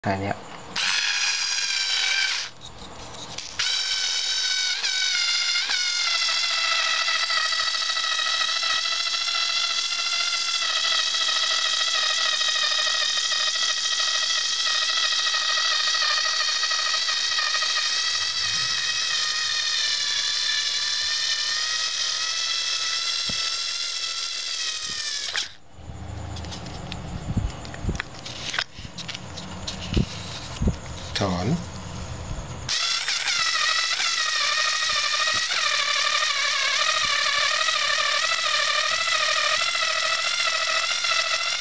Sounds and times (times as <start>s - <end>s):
Speech: 0.0s - 0.4s, 31.2s - 31.6s
Drill: 0.8s - 2.6s, 3.4s - 25.6s, 32.7s - 41.6s.